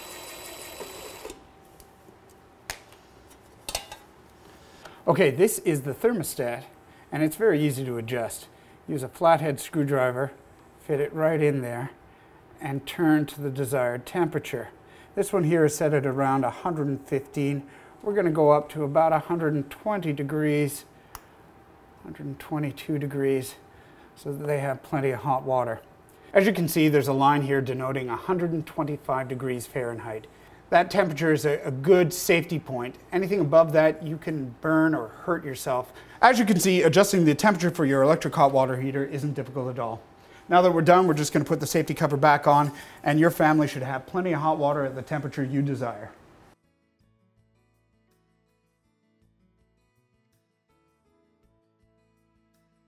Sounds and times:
Speech: 5.0s - 12.0s, 12.6s - 20.9s, 22.0s - 23.6s, 24.2s - 46.2s.

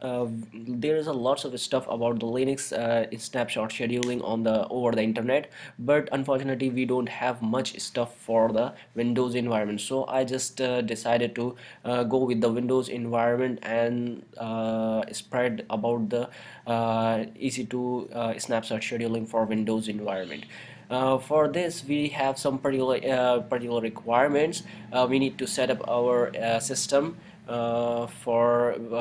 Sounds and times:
Speech: 0.0s - 29.0s.

